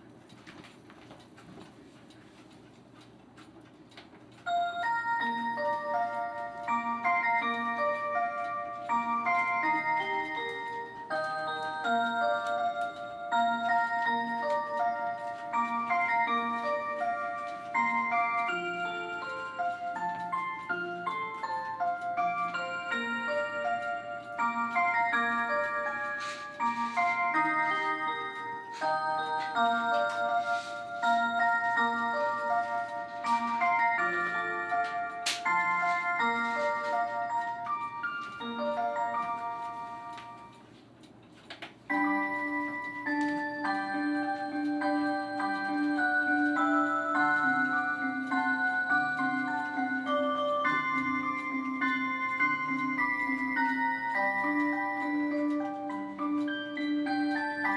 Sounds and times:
Music: 0:04.5 - 0:40.7, 0:41.9 - 0:57.7.

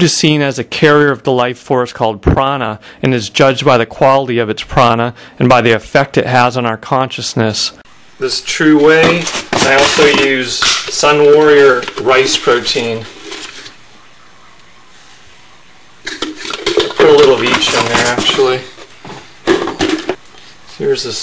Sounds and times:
Speech: 0:00.0 - 0:13.1, 0:17.0 - 0:18.8, 0:20.7 - 0:21.2.

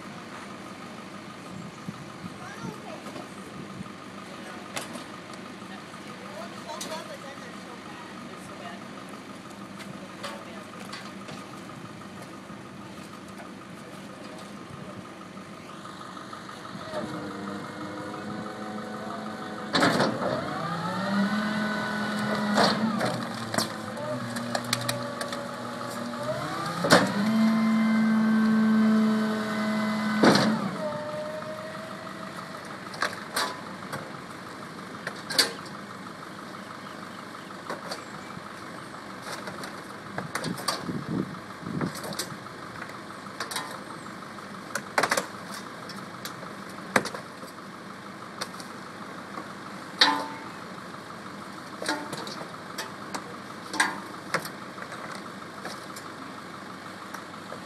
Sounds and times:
Vehicle: 0:00.0 - 0:57.6.

